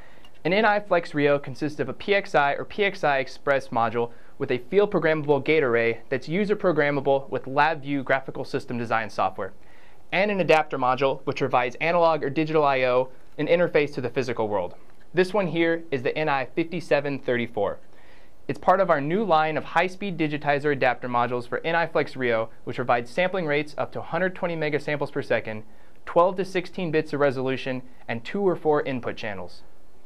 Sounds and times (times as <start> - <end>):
Speech: 0.4 - 17.8, 18.5 - 29.7.